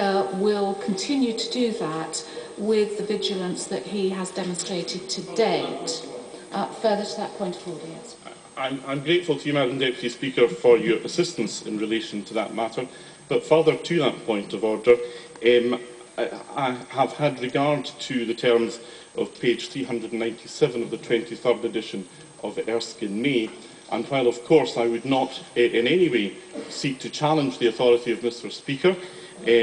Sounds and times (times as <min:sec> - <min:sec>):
Speech: 0:00.0 - 0:29.6.